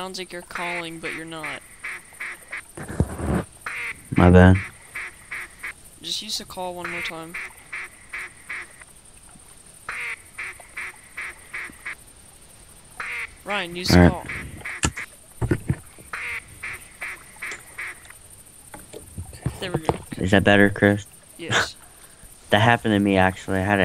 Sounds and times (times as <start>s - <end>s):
Speech: 0.0s - 1.6s, 4.2s - 4.6s, 6.0s - 7.4s, 13.5s - 14.6s, 19.4s - 21.8s, 22.5s - 23.8s
Duck: 9.9s - 12.0s.